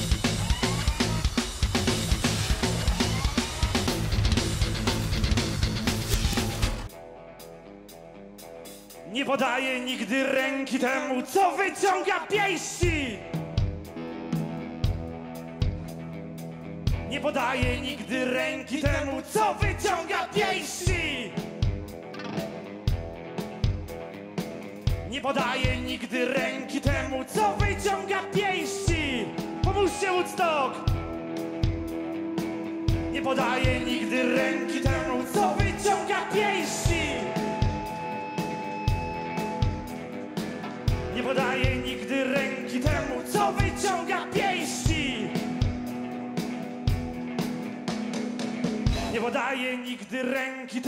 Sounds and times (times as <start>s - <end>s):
Music: 0.0s - 50.8s.